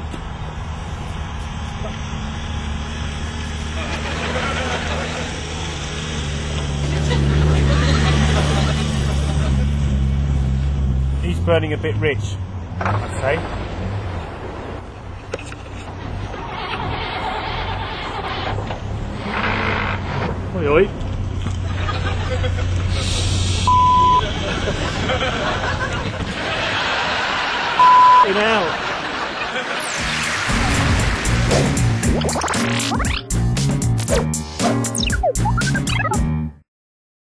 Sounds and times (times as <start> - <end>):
Outside, rural or natural: 0.0 - 36.4
Speech: 11.2 - 12.4, 13.1 - 13.4, 20.5 - 20.9, 28.2 - 28.8
Music: 30.0 - 36.6.